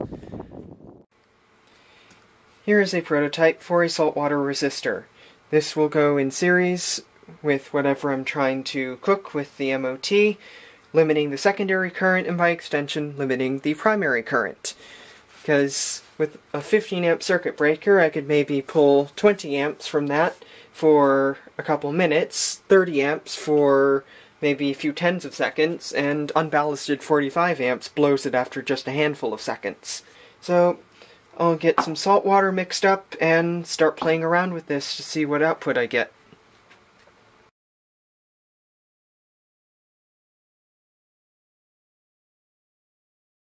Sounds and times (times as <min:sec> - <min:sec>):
Speech: 0:02.6 - 0:14.8, 0:15.4 - 0:30.8, 0:31.4 - 0:36.2.